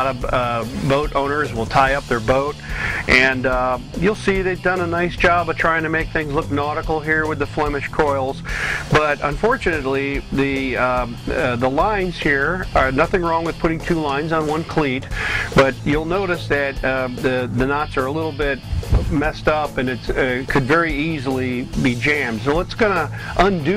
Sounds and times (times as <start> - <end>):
Music: 0.0 - 23.7
Speech: 0.0 - 23.7.